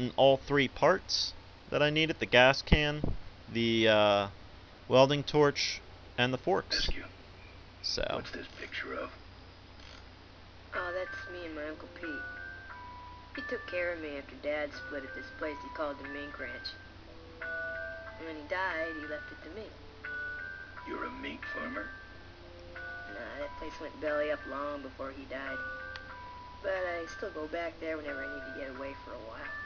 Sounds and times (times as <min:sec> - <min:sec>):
Inside, small room: 0:00.0 - 0:29.6
Music: 0:10.8 - 0:29.6
Ice cream truck, ice cream van: 0:11.9 - 0:13.7, 0:14.8 - 0:18.2, 0:18.8 - 0:23.2, 0:25.6 - 0:27.5.